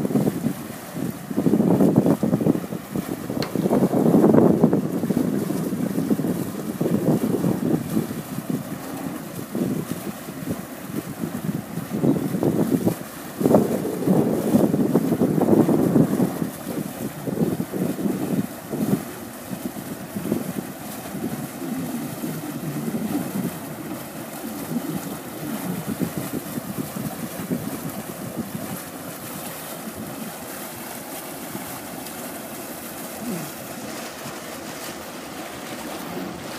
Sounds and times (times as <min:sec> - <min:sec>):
Motorboat, speedboat: 0:00.0 - 0:36.5
Sailboat, sailing ship: 0:00.0 - 0:36.5.